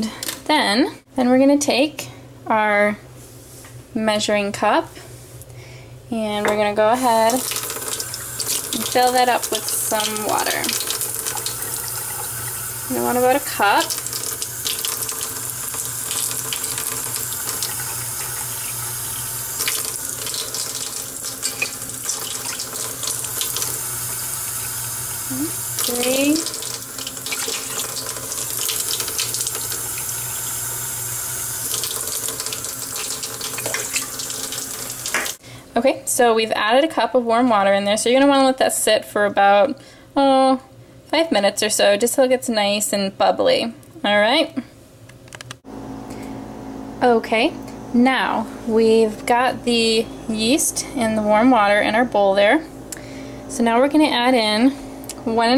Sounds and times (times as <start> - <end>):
Speech: 0.0 - 3.0, 4.0 - 5.0, 6.1 - 7.4, 8.8 - 10.8, 12.9 - 13.9, 25.3 - 26.5, 35.8 - 44.7, 47.0 - 52.7, 53.5 - 55.5
Water tap, faucet: 7.0 - 35.4.